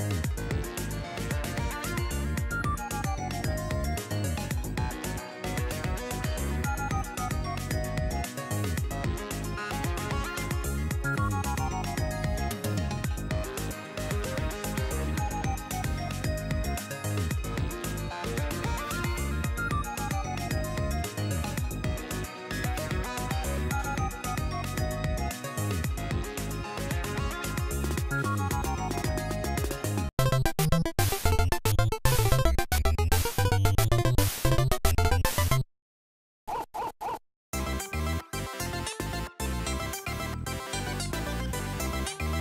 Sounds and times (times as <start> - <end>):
Music: 0.0 - 35.6, 37.6 - 42.4.